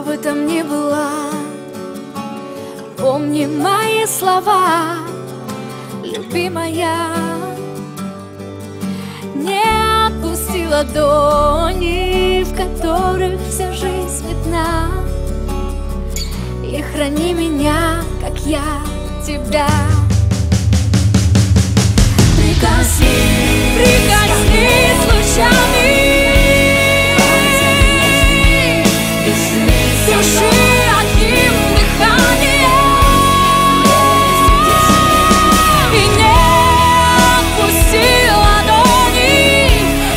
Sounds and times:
Music: 0.0s - 40.1s.

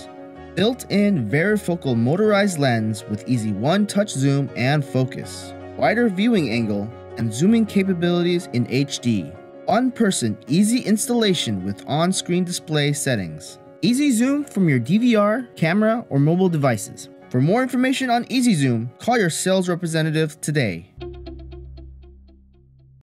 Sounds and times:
Speech: 0.0s - 20.9s
Music: 0.0s - 23.0s.

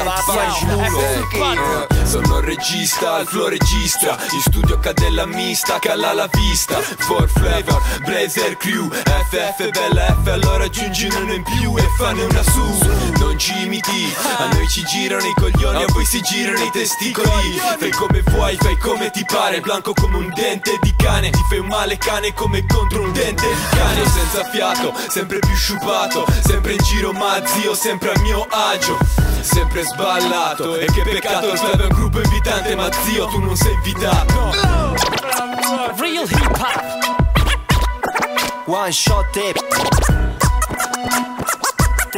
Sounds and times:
Rapping: 0.0s - 40.1s
Music: 0.0s - 42.1s.

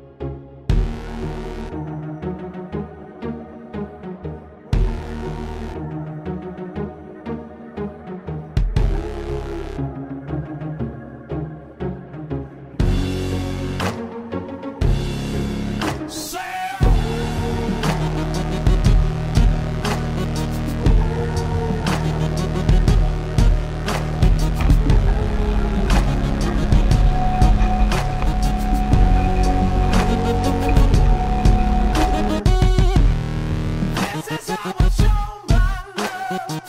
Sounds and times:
Music: 0.0s - 36.6s.

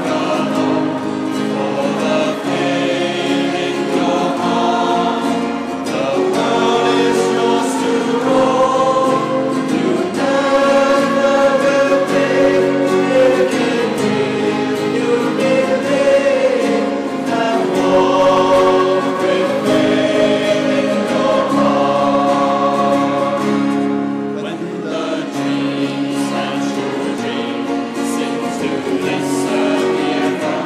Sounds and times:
Music: 0.0s - 30.6s.

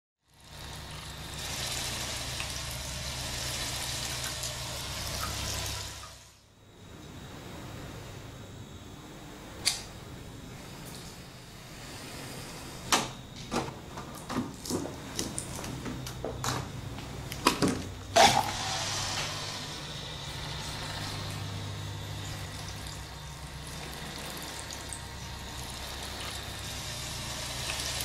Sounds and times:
Water: 0.2s - 6.4s, 20.1s - 28.0s.

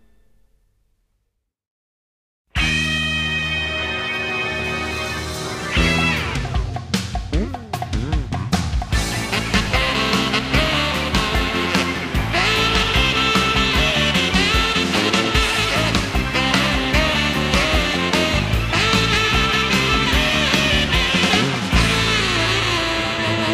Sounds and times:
Dance music: 9.0s - 23.5s.

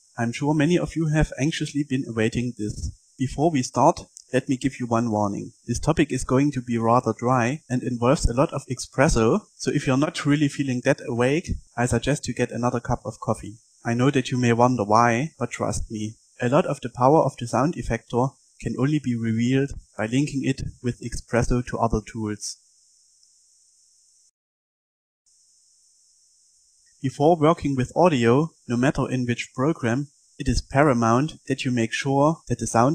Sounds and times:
Speech: 0.2s - 22.6s, 27.0s - 32.9s.

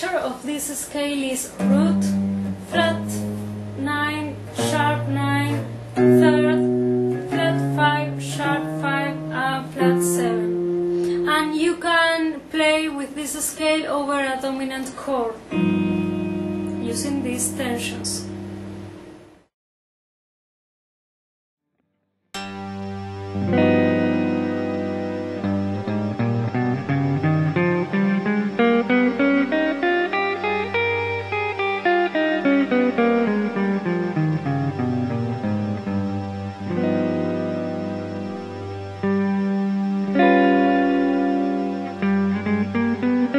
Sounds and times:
Effects unit: 1.5s - 12.8s, 15.4s - 19.5s, 21.7s - 43.3s
Bass guitar: 1.6s - 11.3s, 15.6s - 19.4s, 22.4s - 43.3s.

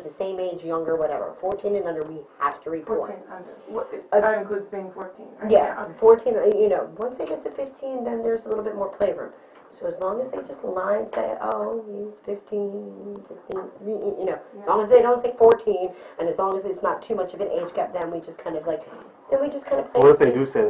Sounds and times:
Speech: 0.0s - 20.7s.

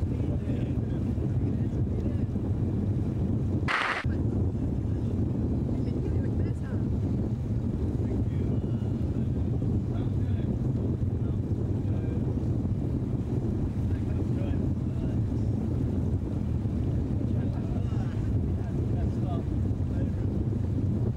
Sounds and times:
Speech: 0.0s - 2.4s, 4.8s - 6.9s, 9.9s - 10.6s, 13.9s - 15.5s, 17.2s - 20.2s.

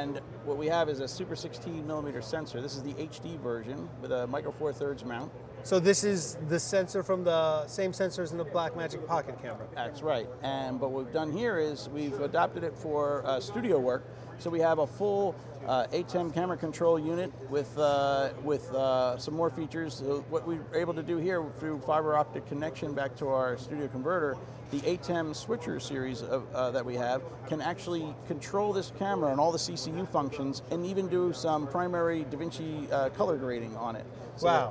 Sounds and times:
Speech: 0.0s - 34.7s.

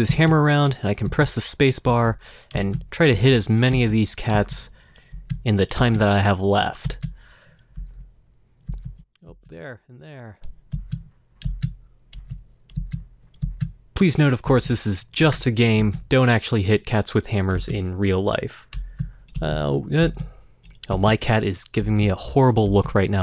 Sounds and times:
Speech: 0.0s - 4.7s, 5.4s - 7.0s, 9.2s - 10.4s, 14.0s - 18.7s, 19.4s - 23.2s.

